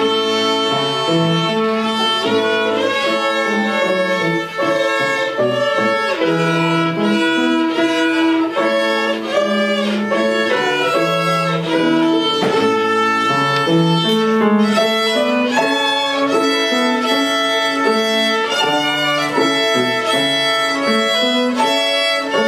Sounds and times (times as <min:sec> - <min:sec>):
Violin, fiddle: 0:00.0 - 0:22.4.